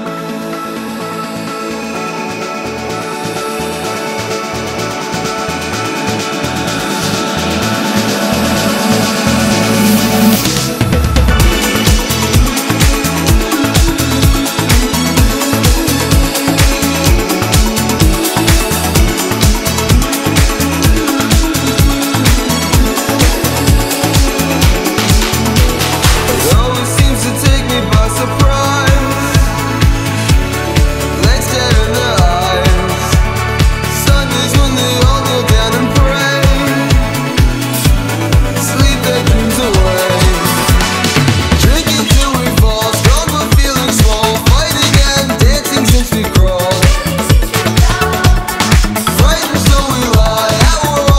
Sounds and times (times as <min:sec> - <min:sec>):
Music: 0:00.0 - 0:51.1.